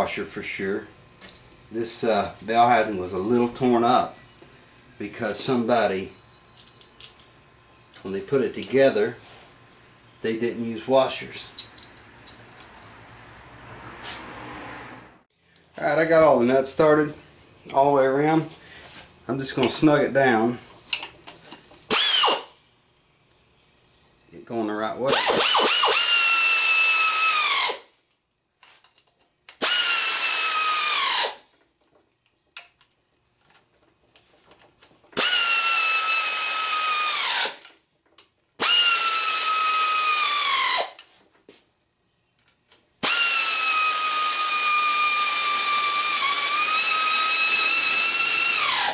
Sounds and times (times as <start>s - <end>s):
Drill: 21.9s - 22.5s, 25.1s - 27.9s, 29.6s - 31.4s, 35.2s - 37.6s, 38.6s - 41.0s, 43.0s - 48.9s.